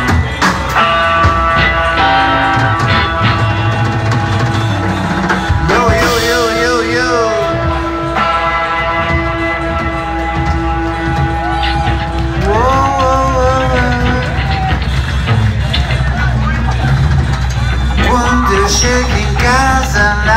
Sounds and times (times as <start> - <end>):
Music: 0.0 - 20.3.